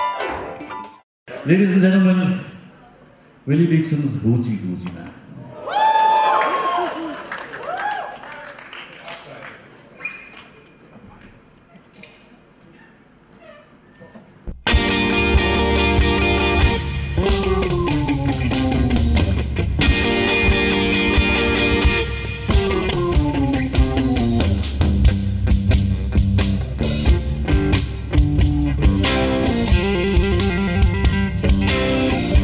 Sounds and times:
Blues: 14.5 - 32.4.

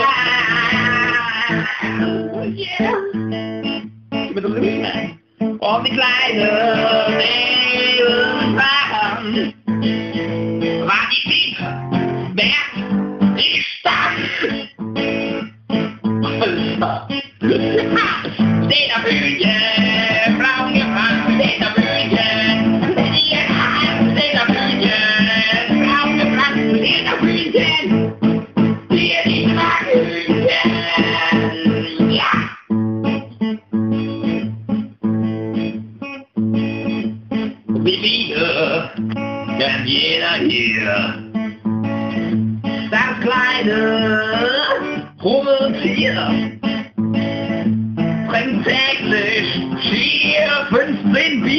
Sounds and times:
Music: 0.0 - 51.5
Speech: 2.5 - 3.2, 4.3 - 5.9, 12.4 - 12.8, 16.2 - 18.3, 37.8 - 39.0, 39.6 - 41.2, 44.5 - 46.5.

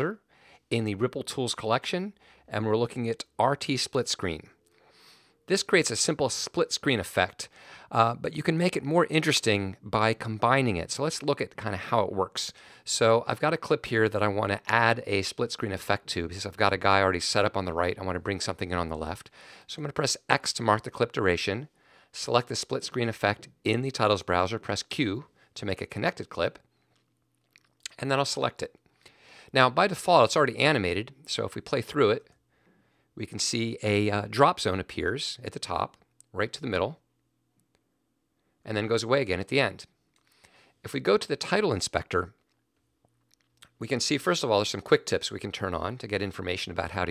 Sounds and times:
Speech: 0.0 - 4.6, 5.5 - 26.6, 27.9 - 28.8, 29.5 - 32.3, 33.2 - 37.0, 38.7 - 40.0, 40.9 - 42.4, 43.6 - 47.1.

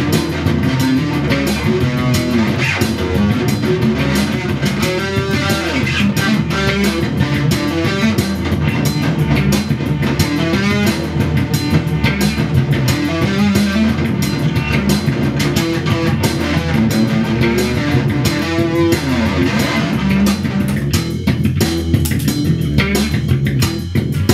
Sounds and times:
Bass guitar: 0.0 - 24.3
Drum machine: 0.0 - 24.3.

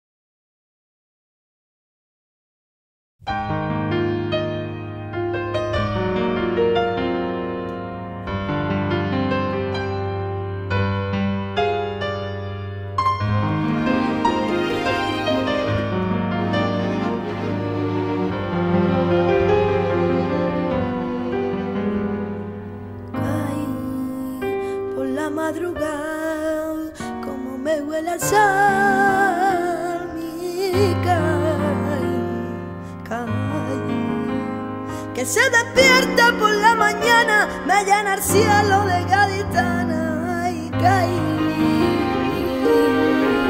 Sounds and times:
Music: 3.2 - 43.5.

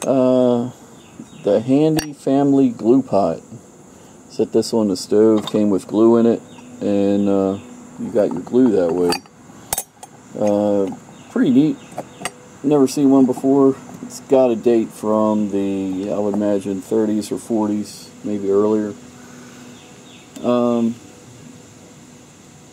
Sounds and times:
Speech: 0.0 - 3.6, 4.3 - 9.2, 10.4 - 11.8, 12.6 - 19.0, 20.4 - 21.0
Outside, rural or natural: 0.0 - 22.7.

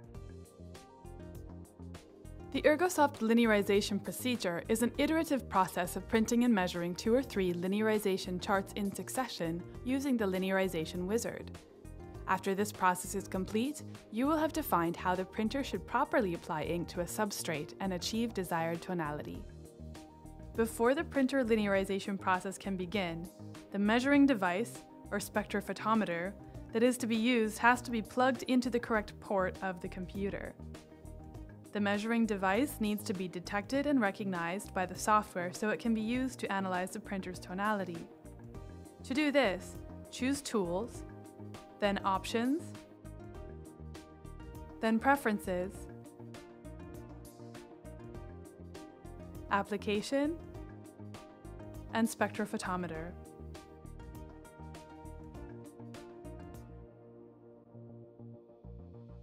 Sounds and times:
Music: 0.0 - 59.2
Speech: 2.6 - 11.4, 12.3 - 19.4, 20.6 - 30.5, 31.8 - 38.1, 39.1 - 41.0, 41.8 - 42.7, 44.8 - 45.8, 49.5 - 50.4, 51.9 - 53.1.

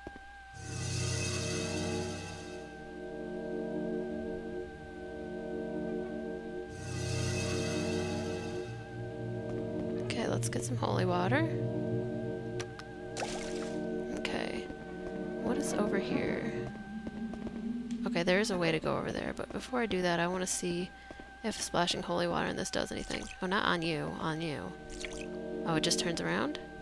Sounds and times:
Music: 0.0 - 26.8.

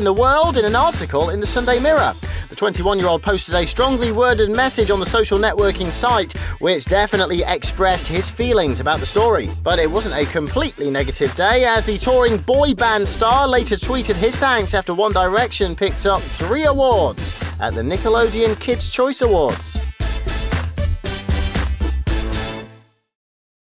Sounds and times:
Speech: 0.0 - 19.9
Music: 0.0 - 23.2.

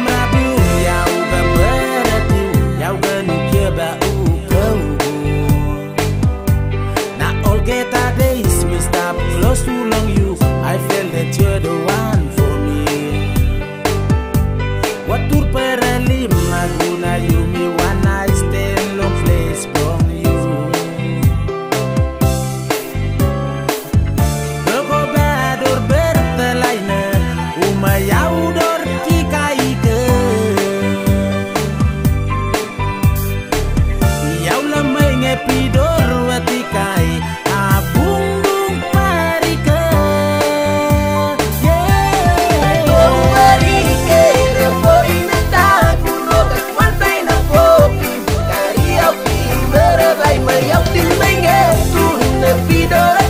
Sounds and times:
Music: 0.0 - 53.3.

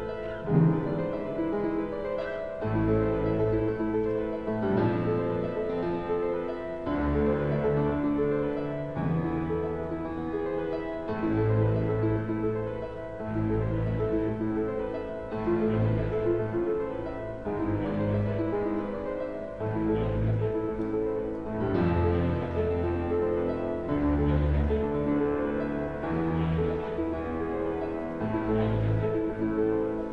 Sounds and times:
Music: 0.0 - 30.1.

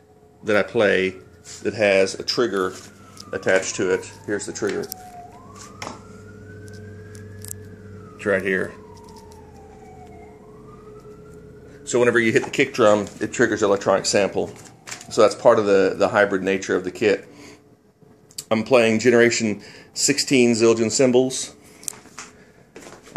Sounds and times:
Speech: 0.5 - 2.8, 3.4 - 4.9, 8.2 - 8.8, 11.9 - 17.3, 18.4 - 21.6.

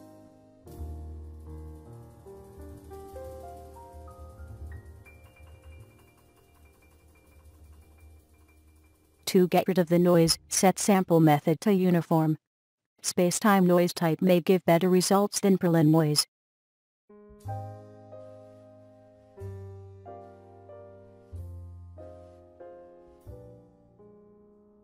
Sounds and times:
Speech: 9.3 - 12.4, 13.0 - 16.3.

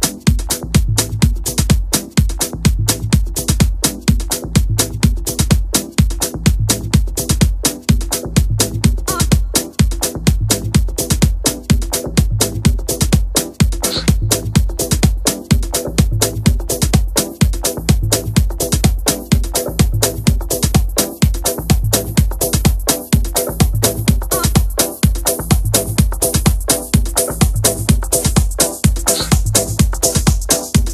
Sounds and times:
Music: 0.0 - 30.9.

